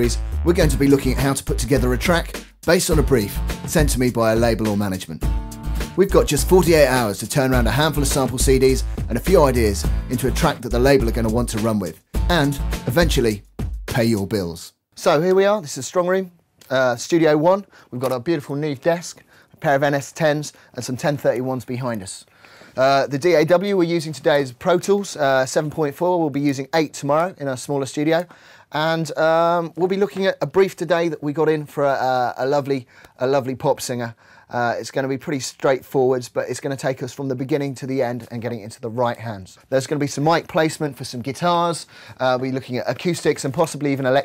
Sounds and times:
Speech: 0:00.0 - 0:05.2, 0:06.0 - 0:44.2
Music: 0:00.0 - 0:14.6.

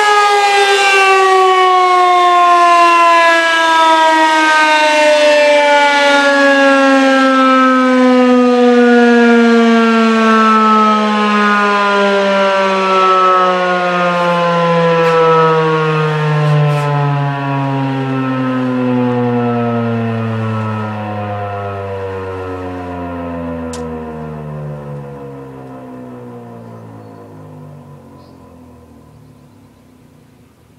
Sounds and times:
Civil defense siren: 0:00.0 - 0:30.7.

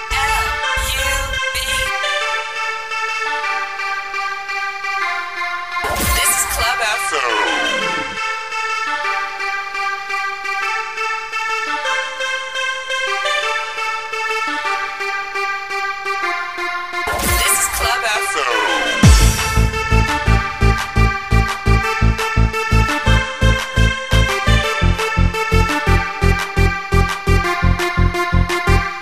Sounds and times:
Music: 0:00.0 - 0:29.0.

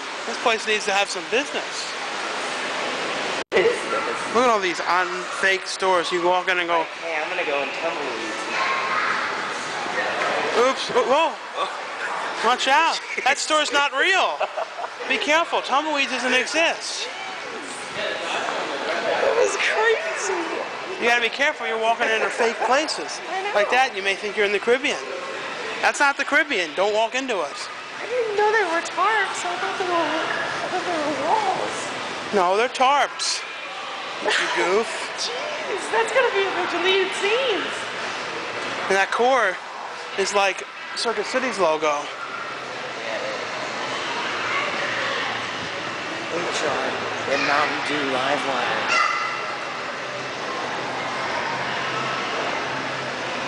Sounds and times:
Inside, public space: 0:00.0 - 0:53.4.

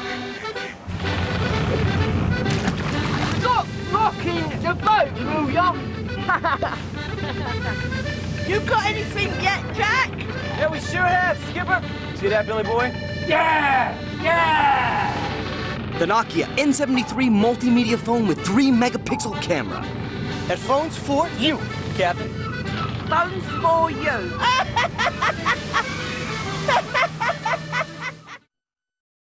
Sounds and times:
Music: 0:00.0 - 0:28.5.

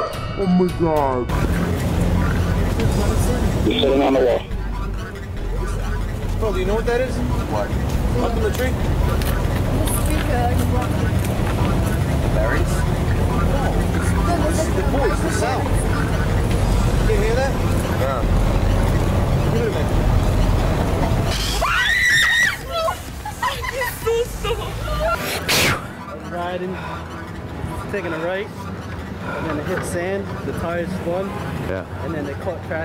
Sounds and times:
Music: 0:00.0 - 0:11.5
Outside, urban or manmade: 0:00.0 - 0:32.8.

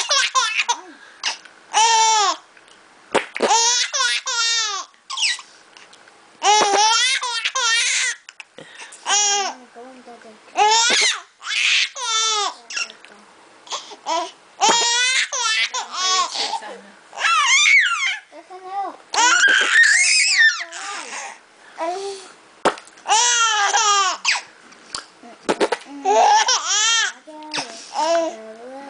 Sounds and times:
Speech: 0:09.6 - 0:10.6, 0:16.3 - 0:17.0, 0:27.2 - 0:28.9.

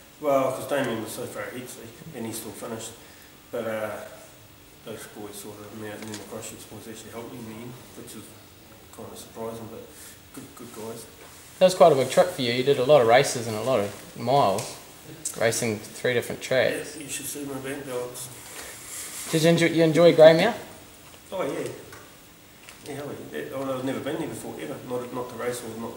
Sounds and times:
Speech: 0:00.2 - 0:18.4, 0:19.3 - 0:21.9, 0:22.8 - 0:25.9.

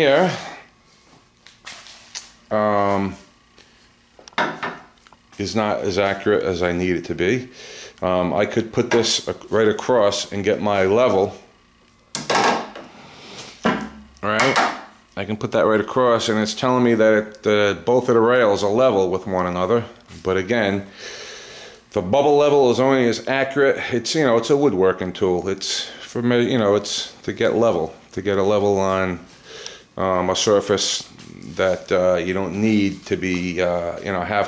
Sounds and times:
Speech: 0:00.0 - 0:00.6, 0:02.5 - 0:03.3, 0:05.4 - 0:11.5, 0:14.2 - 0:20.9, 0:22.0 - 0:29.3, 0:30.0 - 0:34.4
Inside, small room: 0:00.0 - 0:34.4.

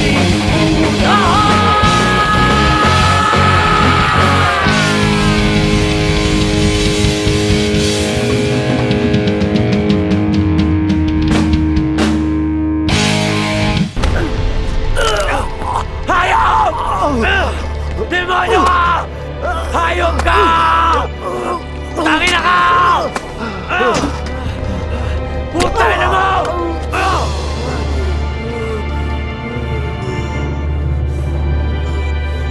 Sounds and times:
Progressive rock: 0:00.0 - 0:15.0.

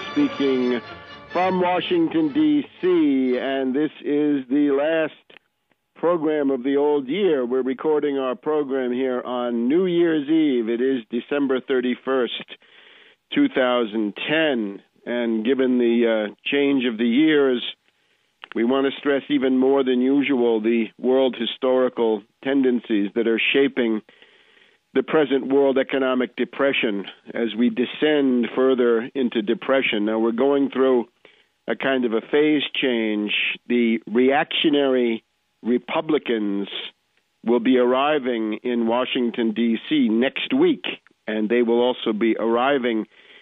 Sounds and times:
Speech: 0:00.0 - 0:00.8, 0:01.4 - 0:05.4, 0:06.0 - 0:12.6, 0:13.3 - 0:17.8, 0:18.5 - 0:24.1, 0:25.0 - 0:43.1.

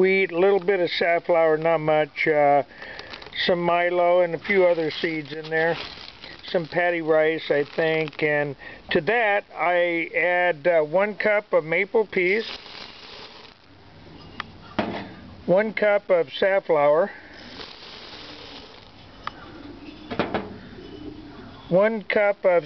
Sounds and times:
Speech: 0:00.0 - 0:02.7, 0:03.4 - 0:12.5, 0:15.5 - 0:17.2, 0:21.7 - 0:22.6.

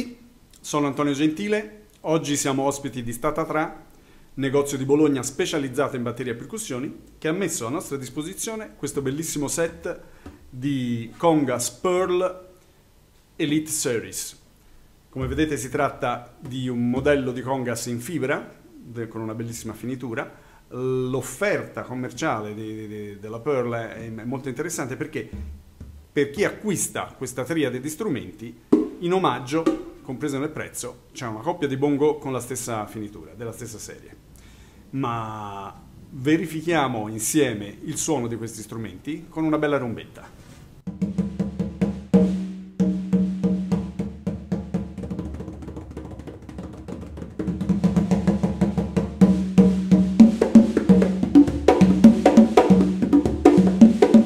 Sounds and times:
Speech: 0:00.0 - 0:03.8, 0:04.4 - 0:10.0, 0:10.6 - 0:12.5, 0:13.4 - 0:14.4, 0:15.1 - 0:25.4, 0:26.2 - 0:34.2, 0:34.9 - 0:40.4.

